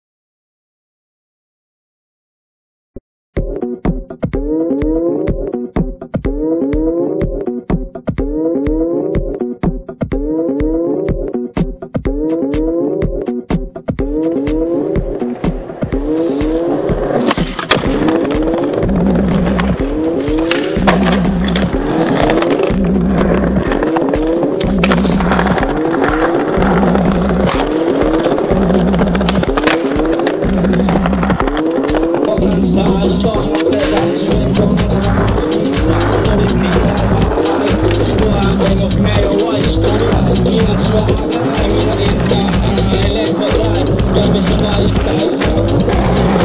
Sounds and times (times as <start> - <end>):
Music: 3.4 - 46.4
Skateboard: 14.0 - 46.4.